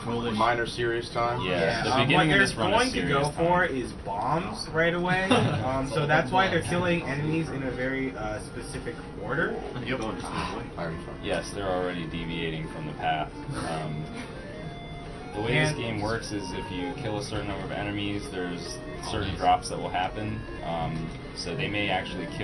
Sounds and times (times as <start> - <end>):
Speech: 0.0 - 14.0, 15.4 - 22.4
Music: 0.0 - 22.4.